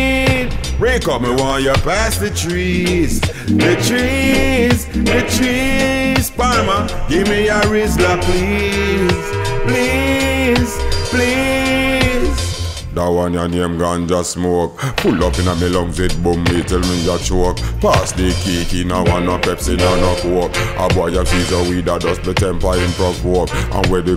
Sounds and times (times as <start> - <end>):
Music: 0.0 - 13.8, 14.8 - 24.1.